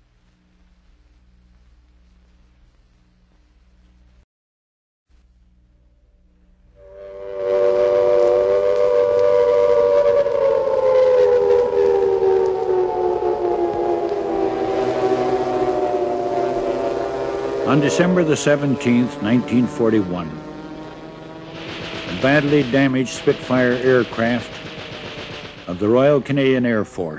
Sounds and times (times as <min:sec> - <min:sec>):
Train whistle: 0:06.8 - 0:27.1.